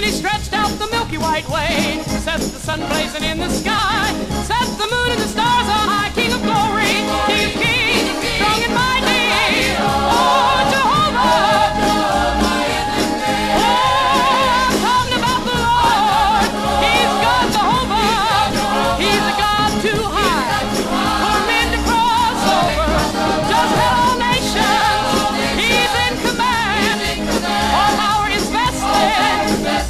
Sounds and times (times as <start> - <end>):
Gospel music: 0.0 - 29.9
Singing: 5.1 - 29.9.